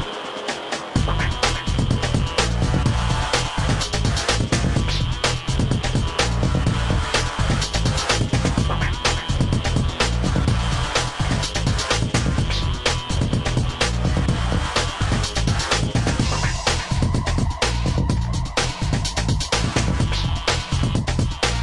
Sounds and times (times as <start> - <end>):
Music: 0.0 - 21.6.